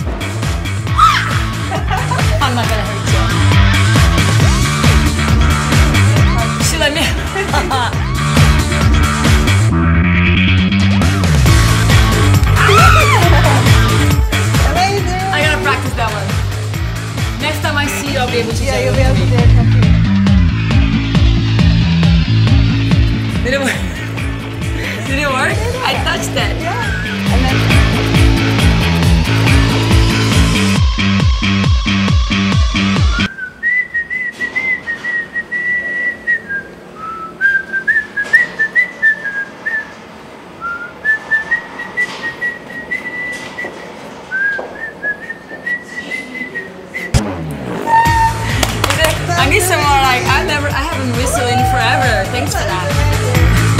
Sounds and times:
Music: 0:00.0 - 0:33.3, 0:47.1 - 0:53.7.

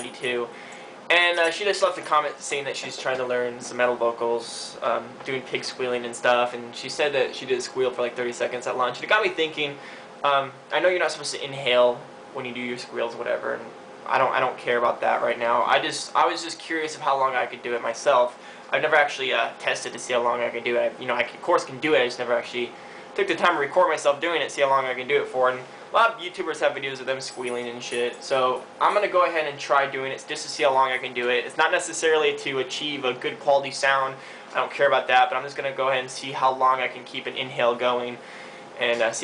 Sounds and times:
Speech: 0:00.0 - 0:38.2, 0:38.8 - 0:39.2.

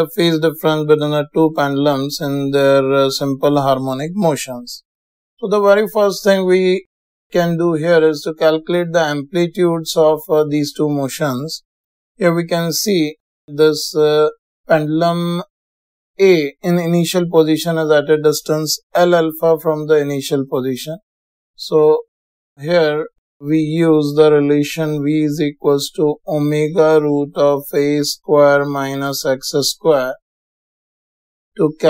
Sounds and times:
Speech: 0:00.0 - 0:04.8, 0:05.4 - 0:11.6, 0:12.2 - 0:15.5, 0:16.2 - 0:21.0, 0:21.6 - 0:22.0, 0:22.6 - 0:30.2, 0:31.6 - 0:31.8.

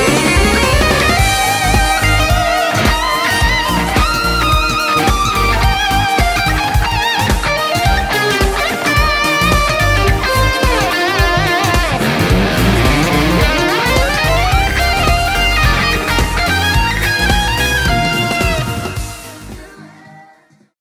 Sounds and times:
Guitar: 0:00.0 - 0:20.7.

